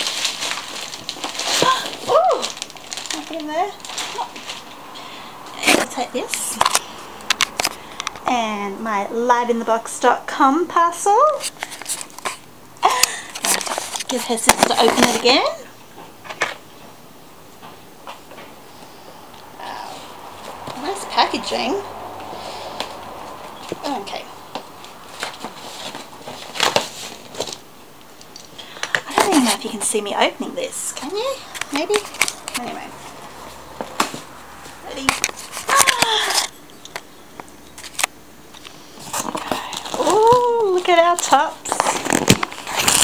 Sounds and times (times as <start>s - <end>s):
Inside, small room: 0.0s - 43.0s
Speech: 3.2s - 4.3s, 5.6s - 6.6s, 8.3s - 11.5s, 14.1s - 15.7s, 19.6s - 20.0s, 20.8s - 21.9s, 23.8s - 24.3s, 29.1s - 33.0s, 40.0s - 41.6s.